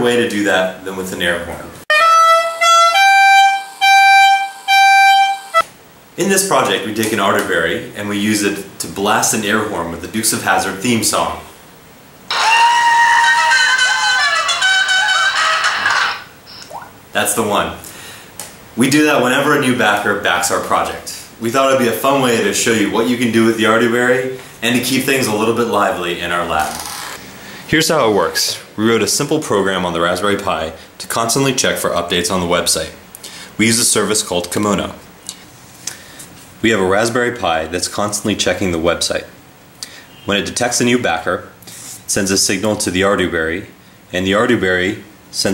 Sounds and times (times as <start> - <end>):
Speech: 0.0 - 1.9, 6.2 - 11.5, 17.1 - 17.8, 18.8 - 26.8, 27.7 - 33.0, 33.6 - 35.0, 36.6 - 39.4, 40.3 - 45.5
Inside, small room: 0.0 - 45.5.